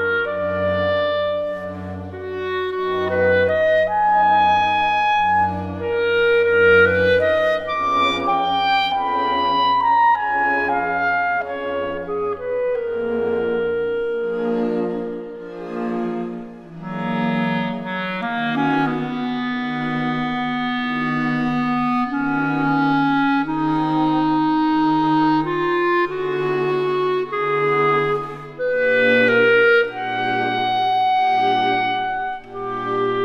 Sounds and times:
Wind instrument, woodwind instrument: 0.0 - 33.2.

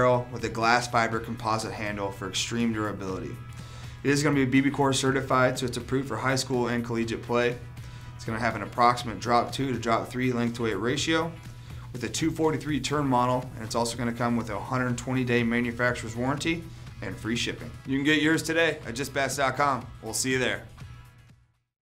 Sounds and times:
Speech: 0.0 - 3.4, 4.0 - 7.6, 8.2 - 11.4, 12.0 - 20.7.

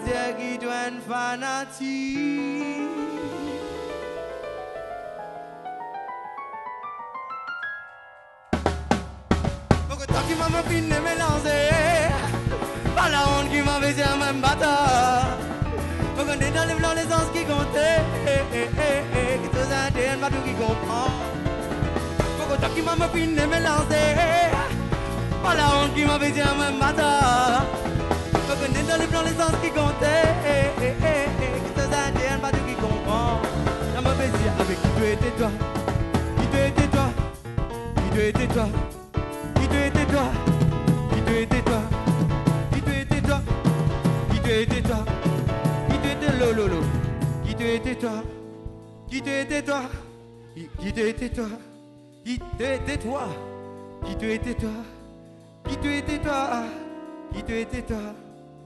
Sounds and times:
Drum kit: 8.5 - 50.1, 50.8 - 58.6
Bass drum: 8.6 - 49.3.

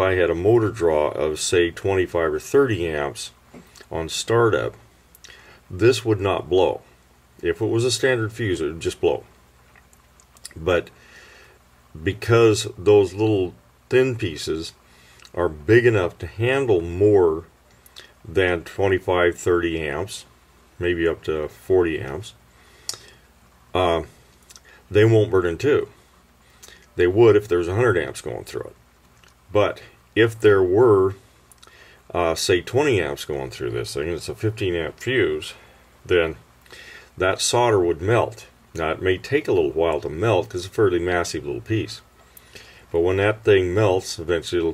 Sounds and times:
Speech: 0.0 - 4.8, 5.7 - 9.3, 10.4 - 11.0, 11.9 - 17.5, 18.2 - 22.4, 23.7 - 24.2, 24.9 - 26.0, 27.0 - 28.8, 29.5 - 31.2, 32.1 - 36.4, 37.2 - 42.1, 42.9 - 44.7.

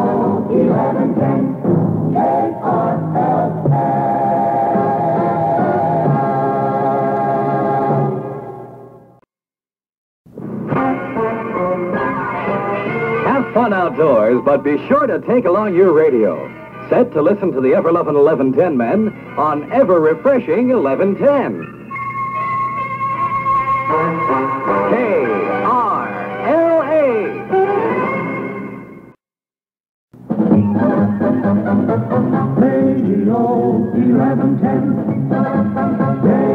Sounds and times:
Music: 0.0 - 9.3, 10.3 - 29.2, 30.2 - 36.5
Speech: 13.3 - 21.6, 24.9 - 27.4.

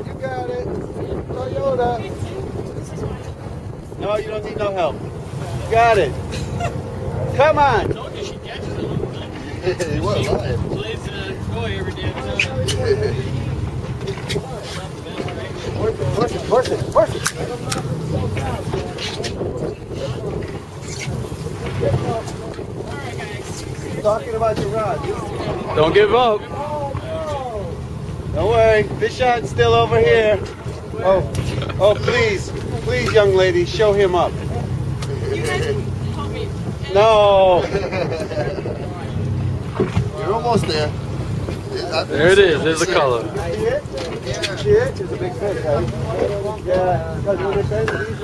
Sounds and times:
Boat, Water vehicle: 0.0 - 48.2.

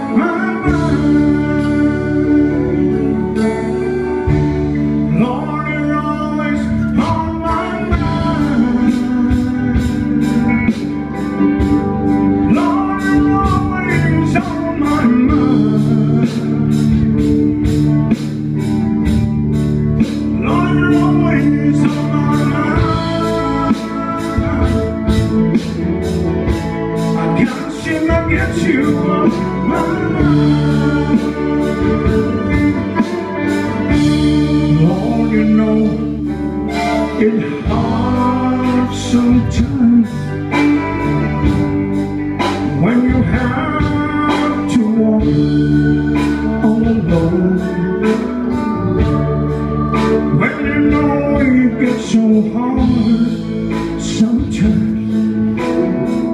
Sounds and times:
Male singing: 0.0 - 4.4, 5.1 - 17.0, 20.4 - 25.4, 27.1 - 41.2, 42.4 - 49.2, 49.9 - 55.3
Music: 0.0 - 56.3.

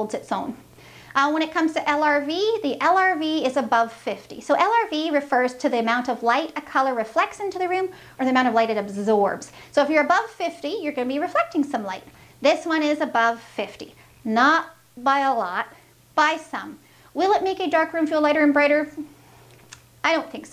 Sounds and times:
Speech: 0.0 - 0.6, 1.2 - 19.1, 20.0 - 20.5.

